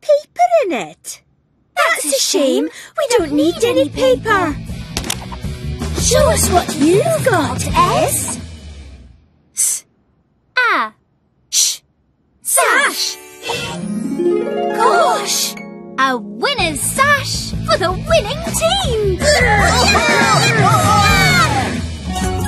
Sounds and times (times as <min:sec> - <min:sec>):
Speech: 0:00.0 - 0:01.2, 0:01.8 - 0:04.6, 0:06.0 - 0:08.4, 0:12.4 - 0:13.8, 0:14.7 - 0:21.6
Music: 0:03.2 - 0:09.1, 0:13.0 - 0:22.4.